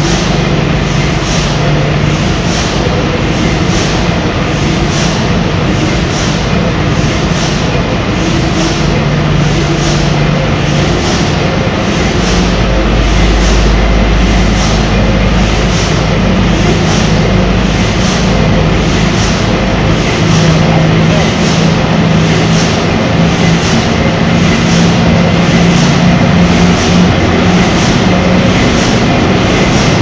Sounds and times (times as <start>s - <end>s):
Heavy engine (low frequency): 0.0s - 30.0s.